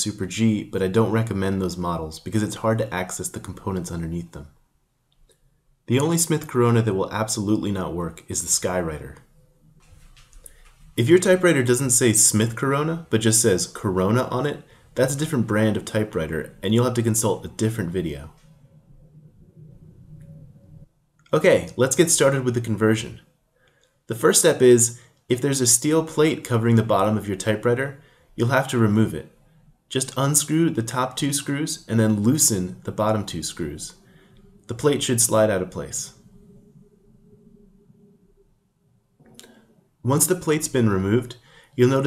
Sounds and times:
Speech: 0:00.0 - 0:04.6, 0:05.9 - 0:09.3, 0:11.0 - 0:18.4, 0:21.3 - 0:23.3, 0:24.1 - 0:34.0, 0:34.7 - 0:36.2, 0:40.0 - 0:42.0.

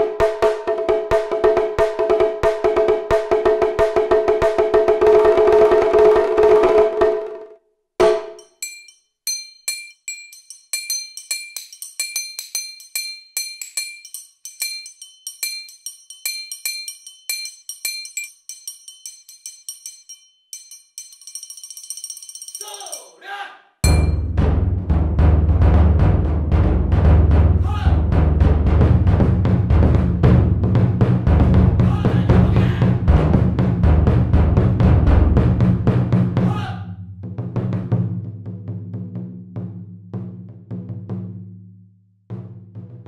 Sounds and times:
Percussion: 0:00.0 - 0:07.4, 0:08.0 - 0:23.2, 0:23.8 - 0:36.4.

